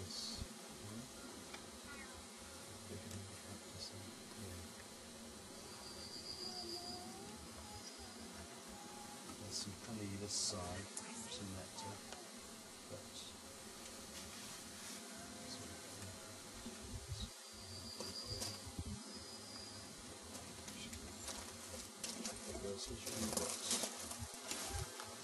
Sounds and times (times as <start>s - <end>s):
Speech: 2.9s - 4.6s, 22.4s - 23.8s.